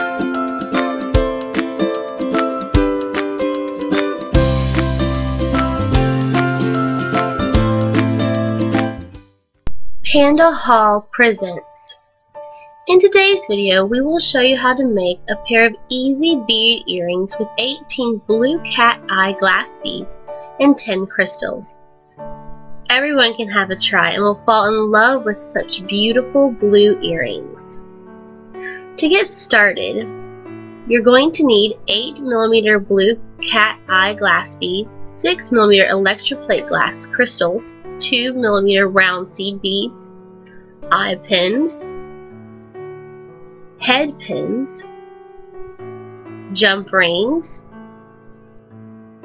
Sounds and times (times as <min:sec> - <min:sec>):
Music: 0:00.0 - 0:49.2
Speech: 0:10.1 - 0:12.0, 0:12.9 - 0:21.8, 0:22.9 - 0:27.8, 0:28.6 - 0:30.1, 0:30.9 - 0:40.1, 0:40.9 - 0:41.8, 0:43.8 - 0:44.8, 0:46.5 - 0:47.6.